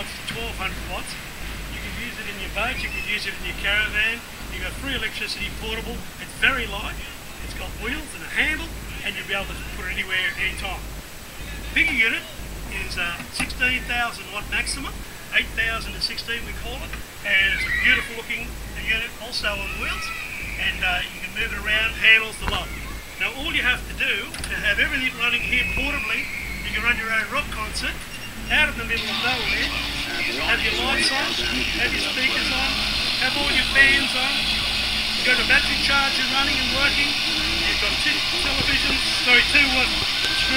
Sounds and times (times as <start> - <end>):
Speech: 0.0 - 10.8, 11.4 - 40.5.